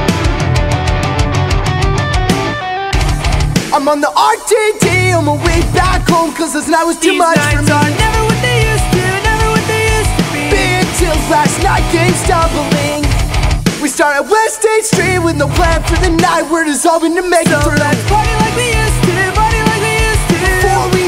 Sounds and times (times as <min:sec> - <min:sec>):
Music: 0:00.0 - 0:21.0.